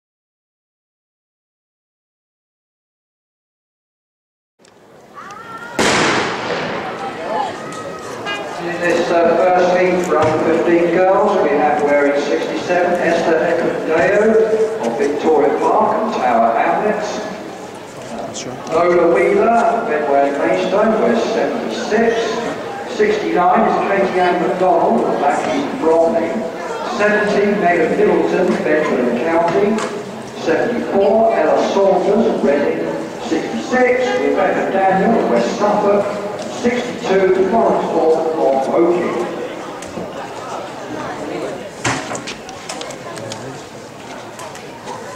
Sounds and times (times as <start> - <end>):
Outside, urban or manmade: 4.6 - 45.1
Speech: 6.8 - 17.4, 18.0 - 41.8, 42.4 - 45.1.